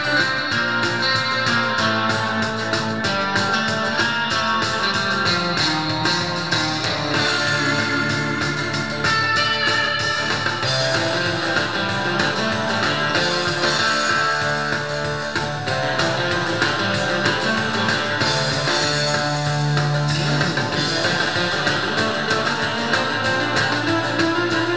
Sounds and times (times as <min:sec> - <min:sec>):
Acoustic guitar: 0:00.0 - 0:24.7.